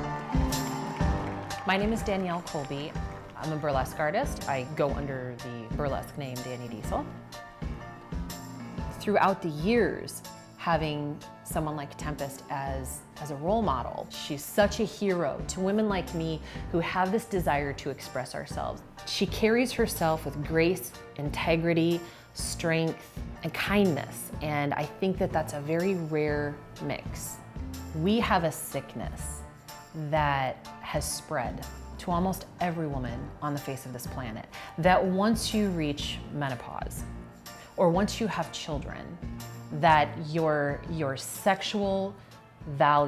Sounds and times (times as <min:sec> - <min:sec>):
Music: 0:00.0 - 0:43.0.